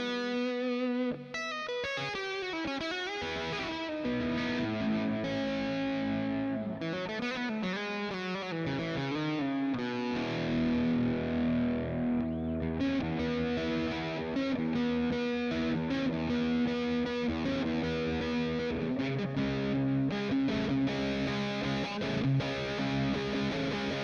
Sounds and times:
Guitar: 0.0 - 24.0.

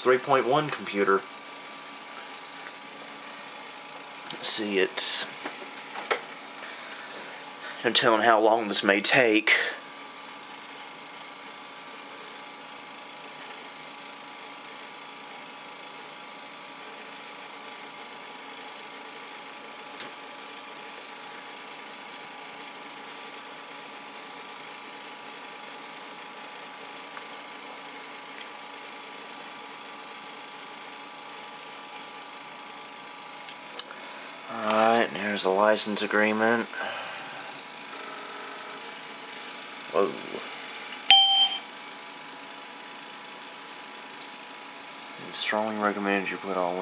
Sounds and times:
Speech: 0.0 - 1.2, 4.3 - 5.3, 7.8 - 9.8, 34.5 - 36.8, 39.9 - 40.5, 45.2 - 46.8.

